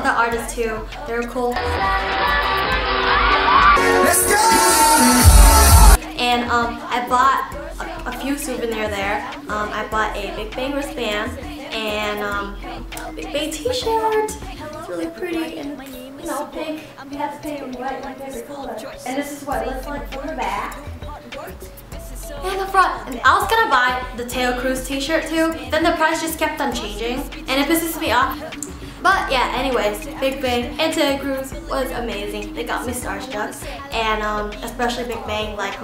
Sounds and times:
Speech: 0.0s - 1.6s, 6.1s - 7.4s, 13.3s - 20.8s, 22.4s - 28.4s, 29.0s - 35.8s
Music: 0.0s - 35.8s.

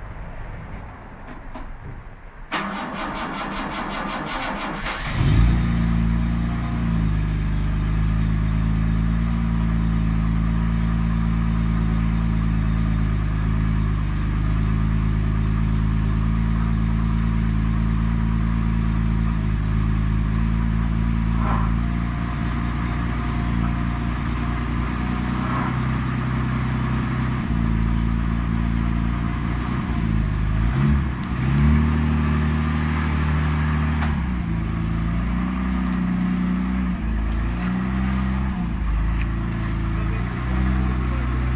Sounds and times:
Car: 0.0s - 41.5s
Heavy engine (low frequency): 0.0s - 41.5s
Idling: 2.5s - 41.5s.

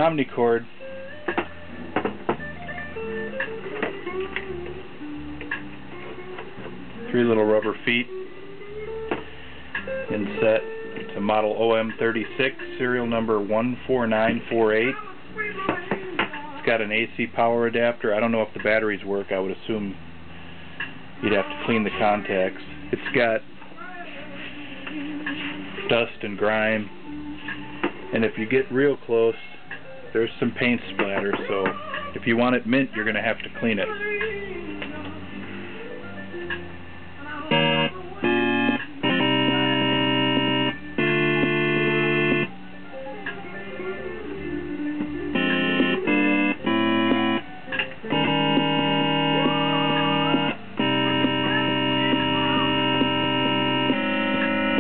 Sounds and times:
Speech: 0.0s - 0.7s, 7.1s - 8.1s, 10.1s - 16.0s, 16.6s - 20.0s, 21.2s - 23.4s, 25.9s - 26.9s, 28.1s - 29.5s, 30.2s - 34.0s
Guitar: 0.0s - 54.8s.

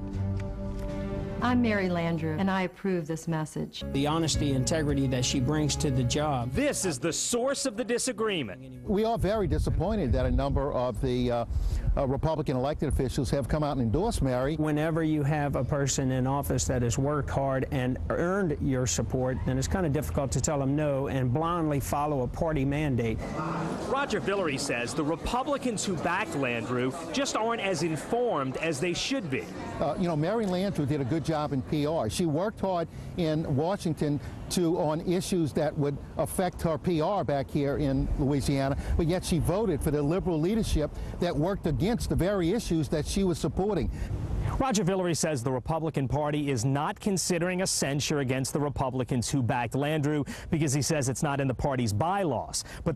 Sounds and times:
Speech: 1.4s - 23.2s, 23.9s - 43.9s, 44.5s - 52.9s.

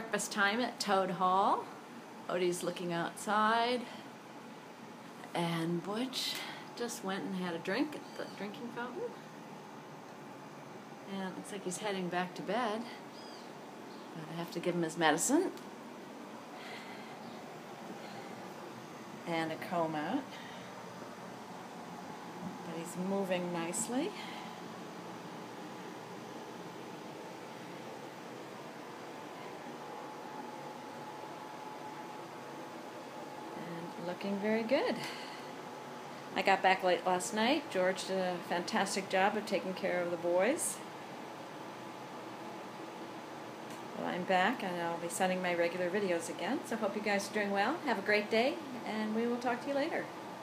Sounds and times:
Speech: 5.3s - 9.2s, 11.1s - 13.0s, 14.2s - 15.6s, 36.4s - 40.9s, 44.0s - 50.1s.

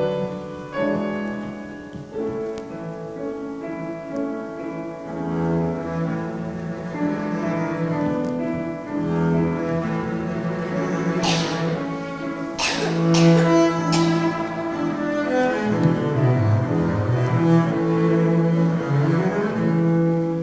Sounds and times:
Cello: 0.0s - 20.4s.

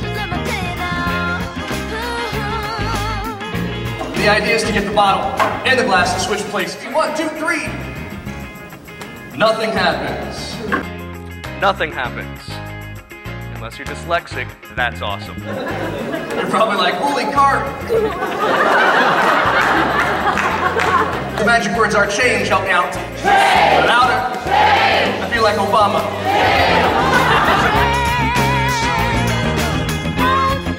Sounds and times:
Music: 0.0s - 30.7s
Speech: 13.6s - 15.4s, 21.4s - 23.0s, 25.2s - 26.1s.

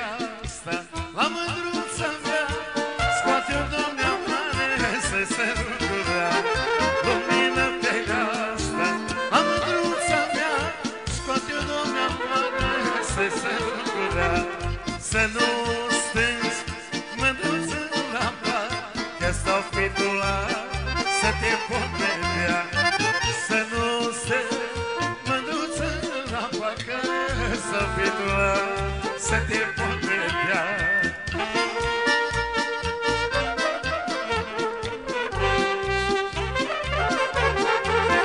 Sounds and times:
Music: 0.0s - 38.2s.

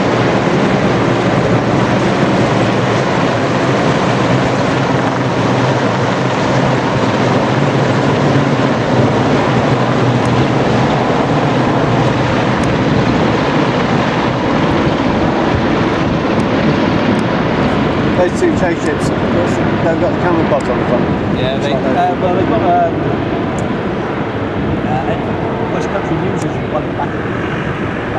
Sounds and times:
Helicopter: 0.0s - 28.1s.

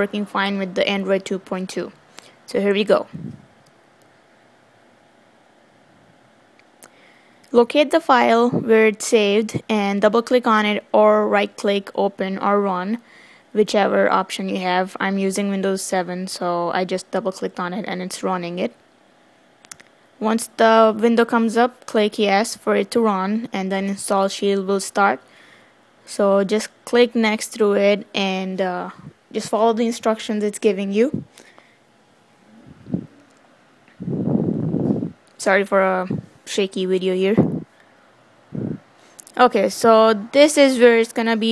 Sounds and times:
Speech: 0.0s - 3.3s, 7.5s - 13.0s, 13.6s - 18.8s, 20.2s - 25.2s, 26.1s - 31.3s, 35.4s - 37.6s, 39.2s - 41.5s.

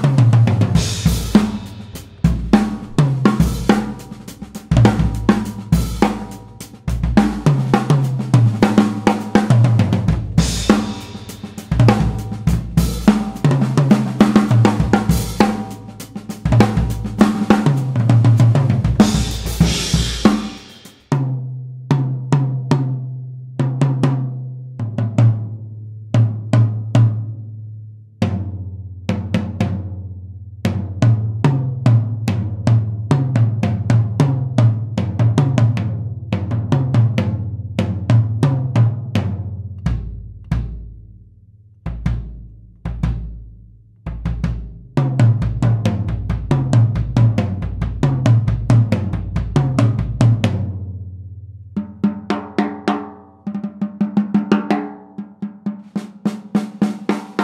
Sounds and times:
Cymbal: 0.0s - 21.3s.

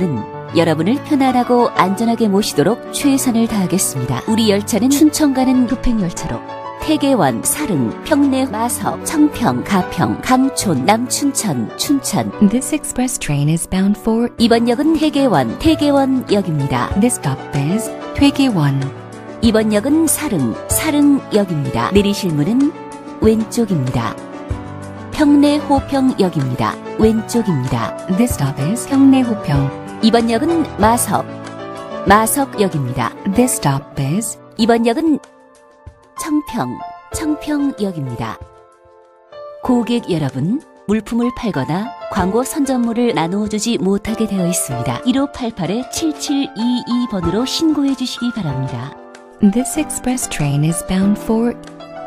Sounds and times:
Speech: 0.0s - 24.2s, 25.2s - 31.3s, 32.1s - 35.2s, 36.2s - 38.4s, 39.7s - 51.6s
Music: 0.0s - 52.0s.

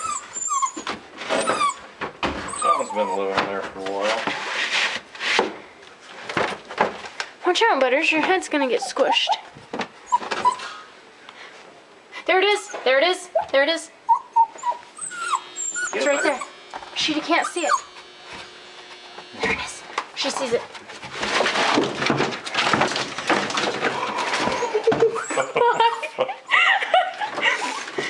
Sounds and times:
Dog: 2.5s - 3.5s, 12.7s - 16.5s.

